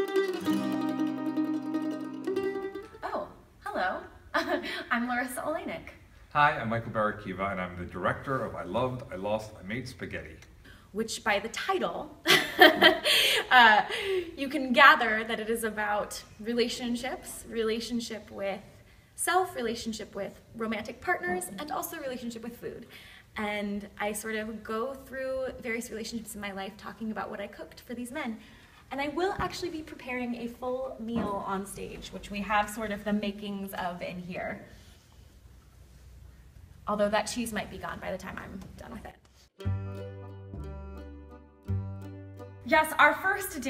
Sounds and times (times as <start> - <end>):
Speech: 23.4 - 34.7, 36.9 - 39.2.